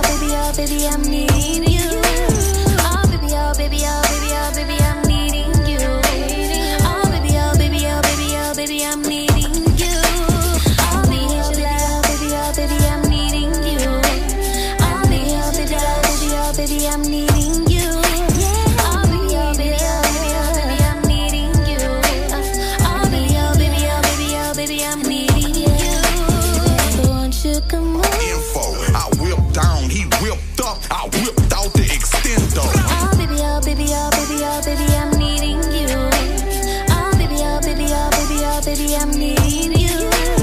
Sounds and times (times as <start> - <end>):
Music: 0.0 - 40.4.